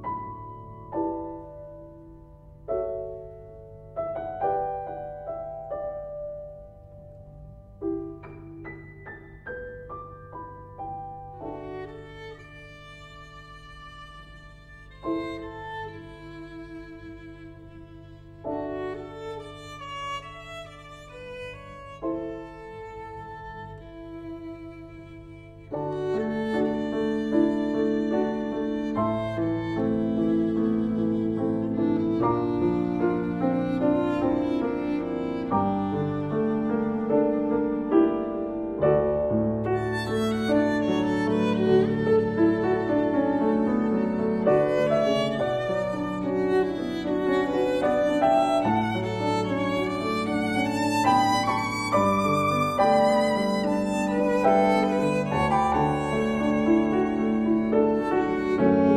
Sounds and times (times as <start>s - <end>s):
Piano: 0.0s - 58.9s.